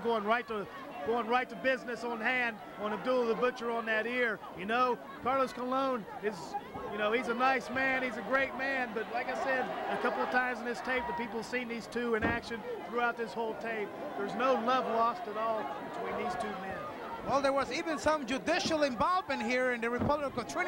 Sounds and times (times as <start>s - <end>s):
Male speech, man speaking: 0.0s - 20.6s.